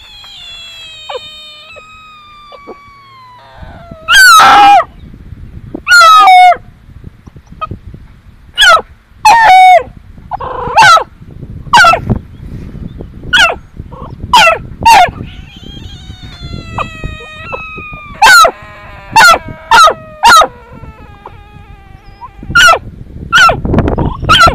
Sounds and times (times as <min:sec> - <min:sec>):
Frog: 0:00.0 - 0:04.8, 0:15.2 - 0:22.8.